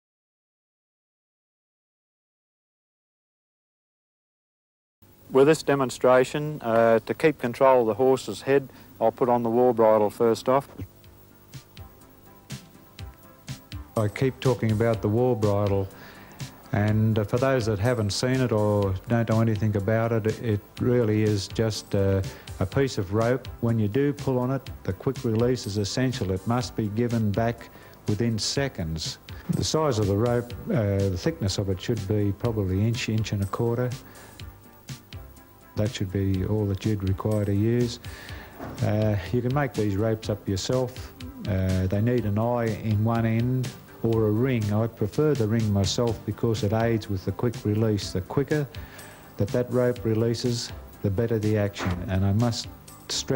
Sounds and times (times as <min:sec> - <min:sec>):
Music: 0:05.0 - 0:53.3
Speech: 0:05.3 - 0:10.9, 0:14.0 - 0:15.9, 0:16.7 - 0:34.0, 0:35.8 - 0:38.0, 0:38.7 - 0:48.7, 0:49.4 - 0:53.3.